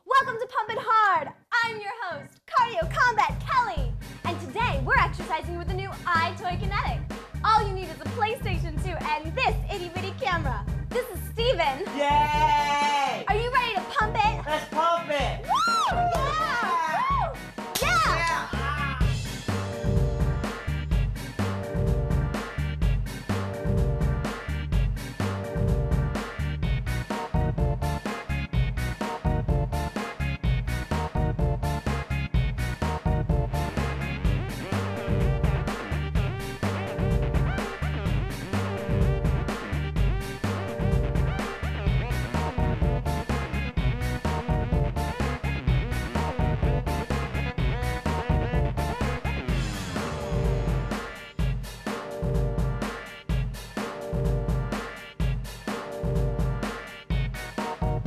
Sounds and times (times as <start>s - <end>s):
Music: 0.0s - 58.0s.